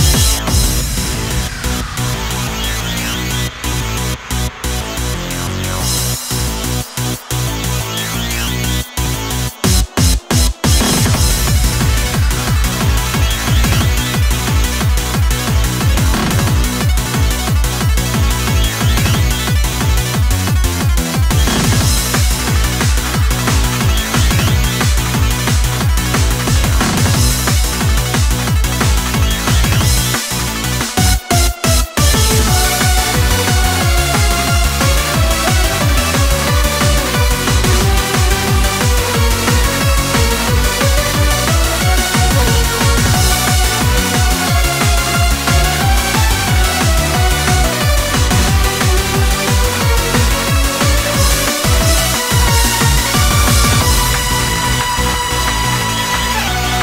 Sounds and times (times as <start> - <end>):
Techno: 0.0 - 56.8.